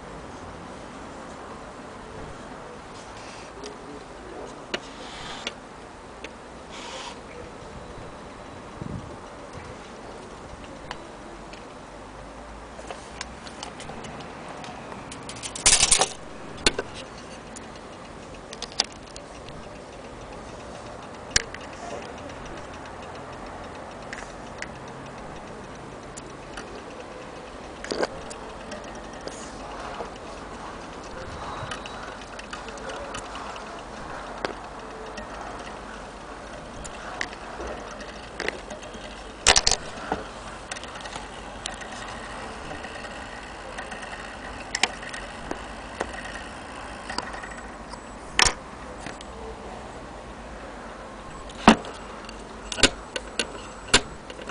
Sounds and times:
Tick-tock: 12.9 - 49.4, 51.2 - 54.5.

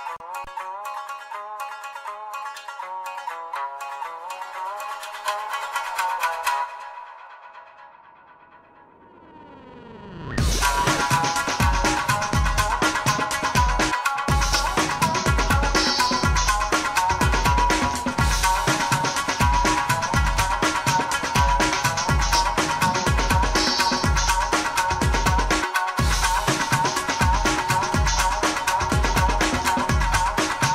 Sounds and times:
Exciting music: 8.5 - 30.7.

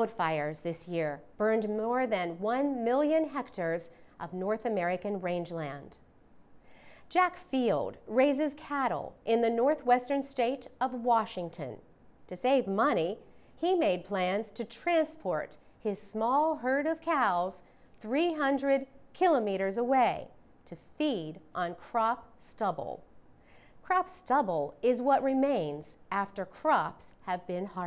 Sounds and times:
Speech: 0.0 - 6.0, 7.1 - 23.0, 23.9 - 27.8.

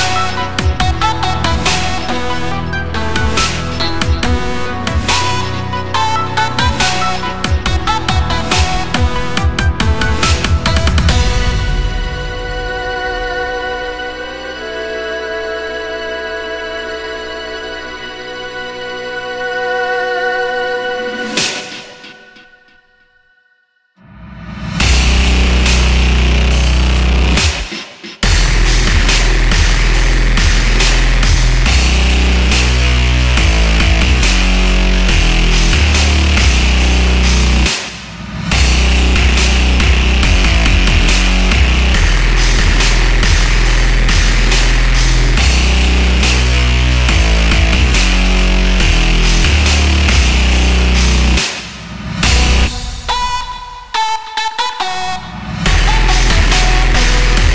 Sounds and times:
Trance music: 0.0 - 23.4, 24.1 - 57.5.

